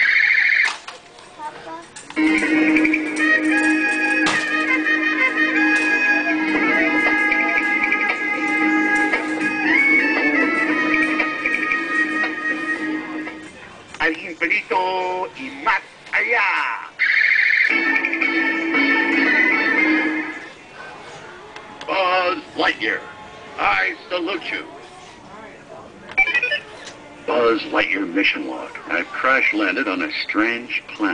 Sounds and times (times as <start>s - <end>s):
Music: 2.2s - 13.7s, 17.7s - 20.6s.